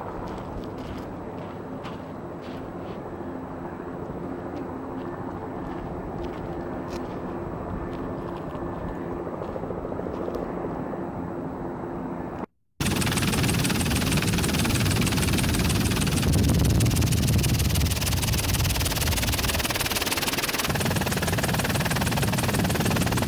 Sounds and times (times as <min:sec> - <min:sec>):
Outside, rural or natural: 0:00.0 - 0:23.2.